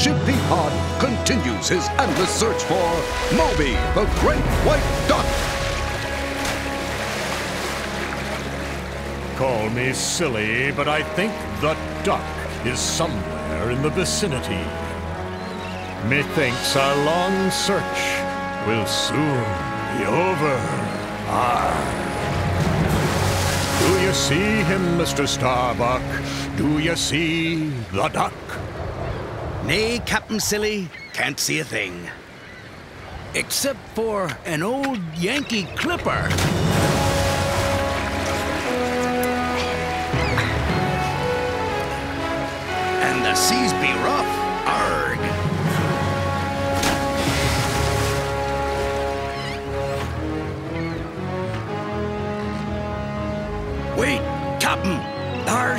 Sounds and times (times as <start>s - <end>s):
Speech: 0.0s - 5.3s, 9.4s - 14.7s, 16.0s - 22.0s, 23.8s - 28.6s, 29.6s - 32.2s, 33.4s - 36.4s, 43.0s - 45.3s, 54.0s - 55.7s
Music: 0.0s - 28.1s, 36.2s - 55.7s.